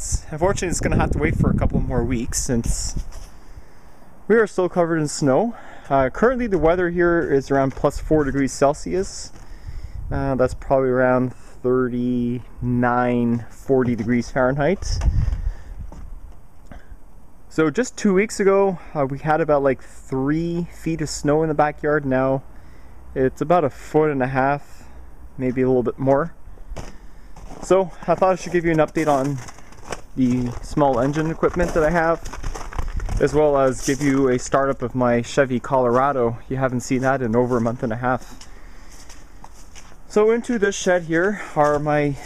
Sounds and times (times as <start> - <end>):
Speech: 0.0 - 3.0, 4.3 - 9.4, 10.1 - 15.0, 17.5 - 22.4, 23.2 - 24.8, 25.4 - 26.4, 27.6 - 29.5, 30.2 - 32.3, 33.2 - 38.3, 40.1 - 42.2.